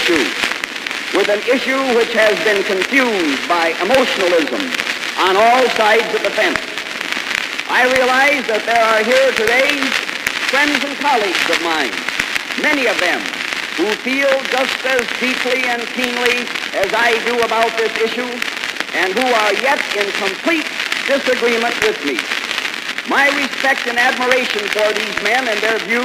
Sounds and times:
Male speech, man speaking: 0.0s - 0.4s, 1.2s - 6.8s, 7.7s - 12.0s, 12.6s - 22.2s, 23.1s - 26.0s
Narration, monologue: 0.0s - 26.0s.

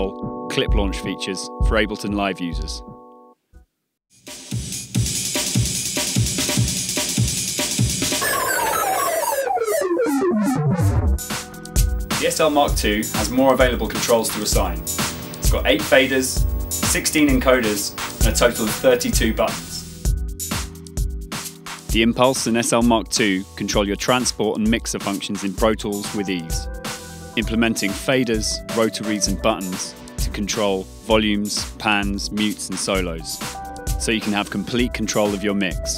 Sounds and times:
Speech: 0.0s - 2.9s, 12.1s - 14.8s, 15.4s - 19.9s, 21.9s - 26.7s, 27.4s - 33.4s, 34.0s - 35.9s
Music: 0.0s - 35.9s.

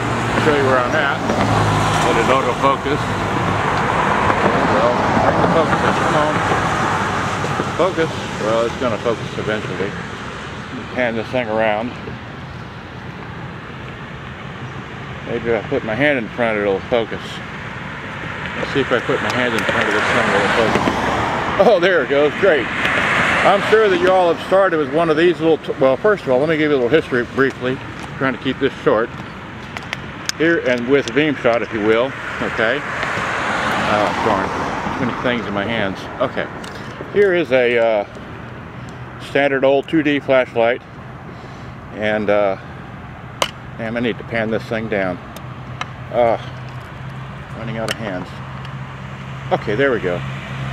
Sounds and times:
Vehicle: 0.0s - 50.7s
Speech: 0.4s - 1.2s, 2.0s - 3.1s, 4.6s - 6.5s, 7.7s - 10.0s, 10.7s - 12.1s, 15.3s - 17.4s, 18.6s - 20.8s, 21.6s - 22.7s, 23.4s - 29.1s, 30.4s - 32.9s, 33.8s - 38.1s, 39.2s - 40.8s, 42.0s - 42.6s, 43.8s - 45.2s, 46.1s - 46.5s, 47.6s - 48.4s, 49.5s - 50.2s.

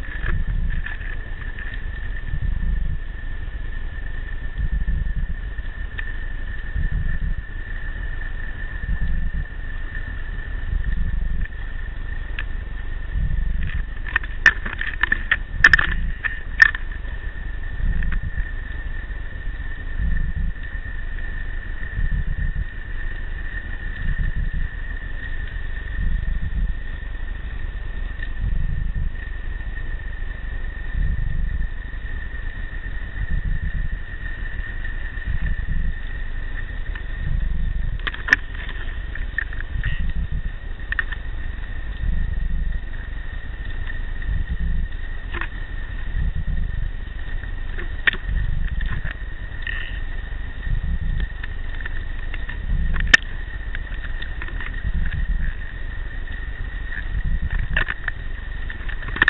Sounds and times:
Rattle: 0.0s - 59.3s.

